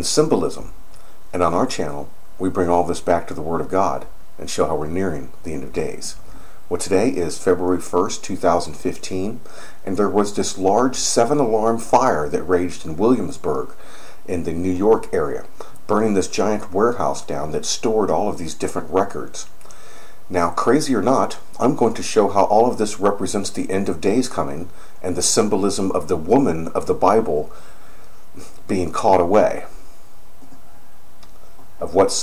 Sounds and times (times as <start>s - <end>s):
Speech: 0.0s - 19.6s, 20.3s - 27.5s, 28.4s - 29.8s, 31.8s - 32.2s.